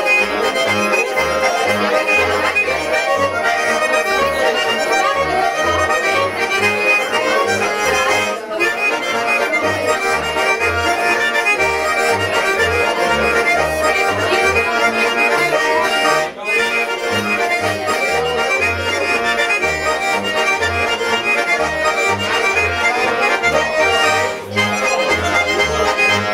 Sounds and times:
Music: 0:00.0 - 0:26.3.

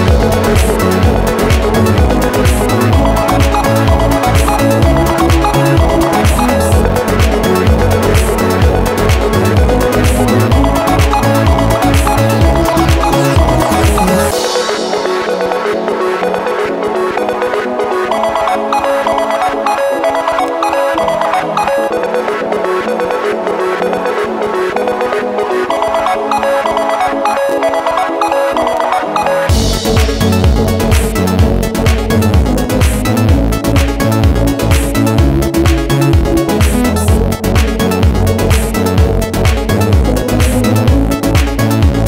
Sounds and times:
Music: 0:00.0 - 0:42.0.

